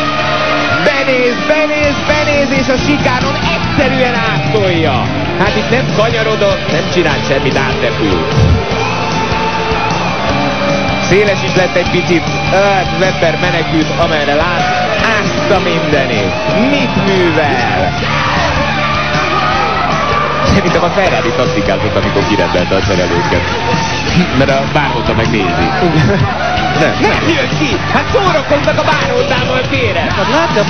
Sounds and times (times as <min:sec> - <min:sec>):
Music: 0:00.0 - 0:30.6.